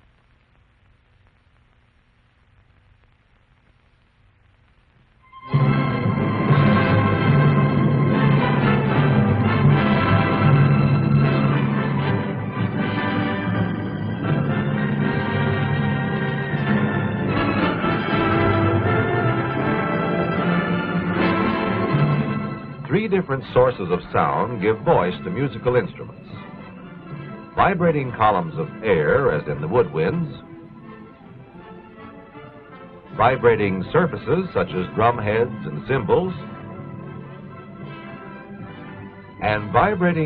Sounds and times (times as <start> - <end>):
Music: 5.2 - 40.2
Speech: 22.9 - 26.2, 27.6 - 30.4, 33.2 - 36.4, 39.4 - 40.2.